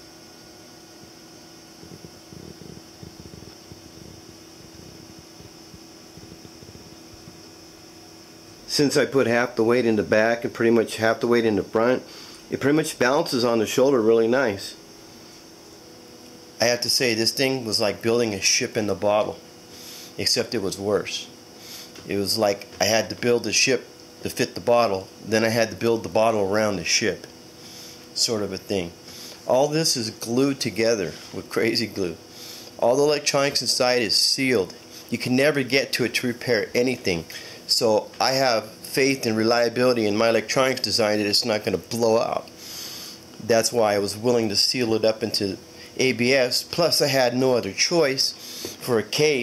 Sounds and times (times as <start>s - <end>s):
Speech: 8.7s - 14.8s, 16.6s - 19.4s, 20.2s - 21.3s, 22.0s - 27.3s, 28.2s - 32.2s, 32.8s - 42.5s, 43.4s - 49.4s.